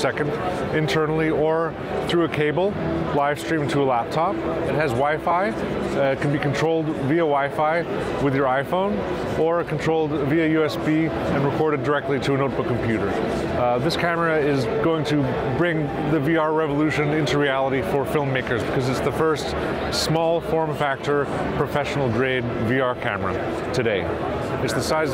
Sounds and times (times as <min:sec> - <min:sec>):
Speech: 0:00.0 - 0:25.1.